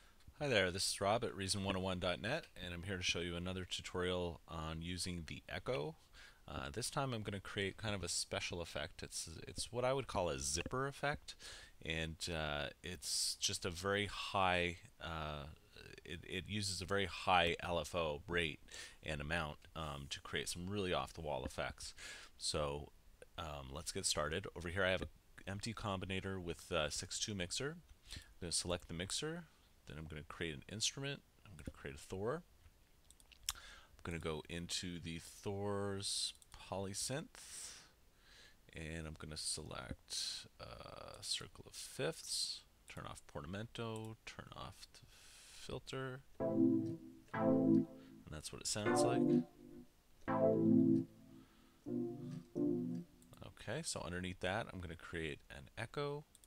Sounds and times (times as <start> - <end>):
Speech: 0.4 - 27.8, 28.4 - 32.5, 34.0 - 37.9, 38.7 - 46.3, 48.3 - 49.4, 53.3 - 56.4.